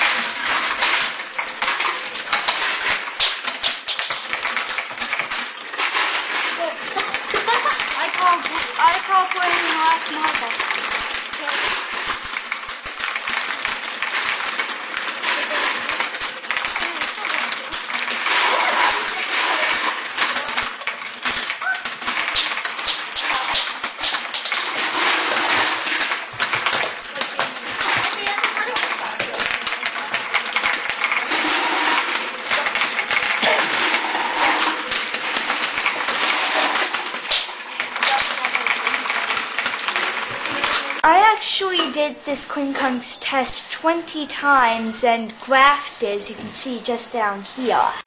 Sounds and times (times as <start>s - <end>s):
Speech: 8.0s - 10.6s, 40.4s - 48.0s.